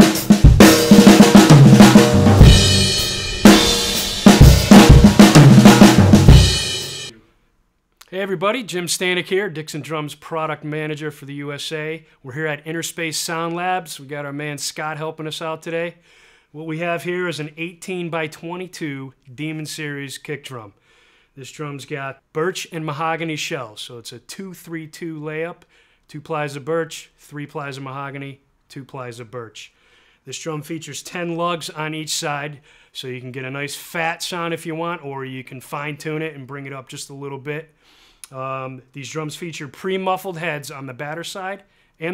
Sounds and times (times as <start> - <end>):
Speech: 8.0 - 16.0, 16.6 - 20.8, 21.4 - 37.7, 38.3 - 42.1.